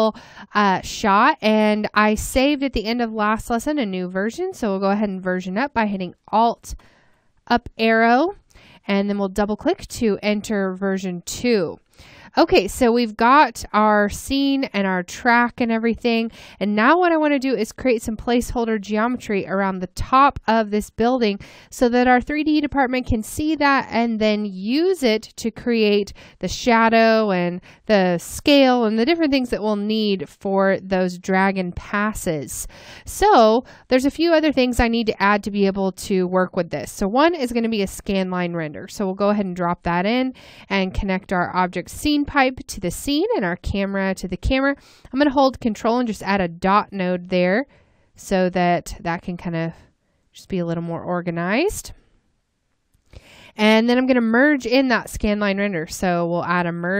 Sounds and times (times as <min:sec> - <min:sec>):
Speech: 0:00.0 - 0:06.8, 0:07.5 - 0:47.6, 0:48.2 - 0:49.8, 0:50.4 - 0:52.0, 0:53.6 - 0:56.9.